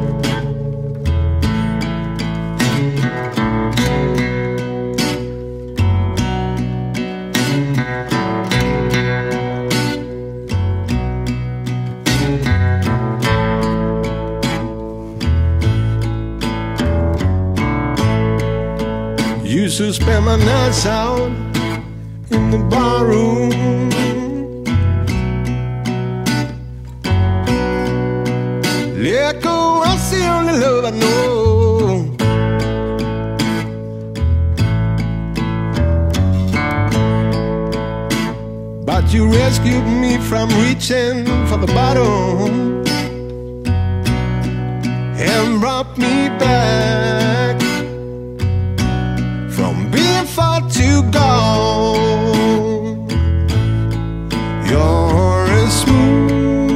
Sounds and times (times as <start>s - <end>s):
Music: 0.0s - 56.7s.